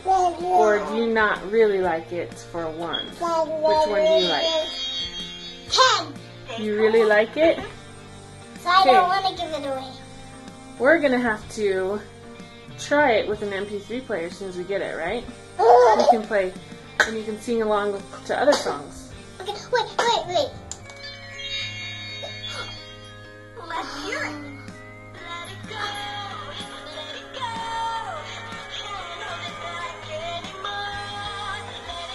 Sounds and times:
Music: 0.0 - 32.1
Jingle, tinkle: 3.9 - 6.6, 20.9 - 27.0.

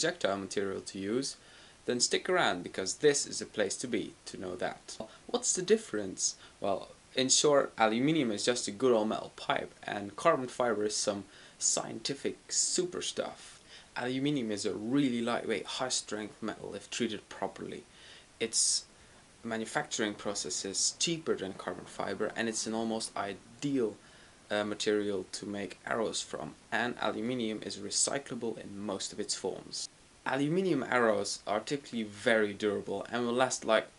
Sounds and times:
Speech: 0.0 - 33.9.

